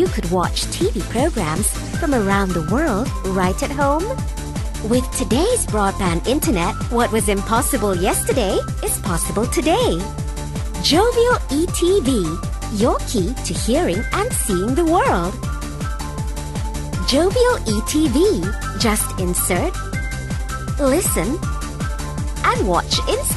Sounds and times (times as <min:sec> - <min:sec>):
Speech: 0:00.0 - 0:04.2, 0:04.9 - 0:10.1, 0:10.8 - 0:15.4, 0:17.0 - 0:19.7, 0:20.8 - 0:21.4, 0:22.5 - 0:23.3
Music: 0:00.0 - 0:23.3.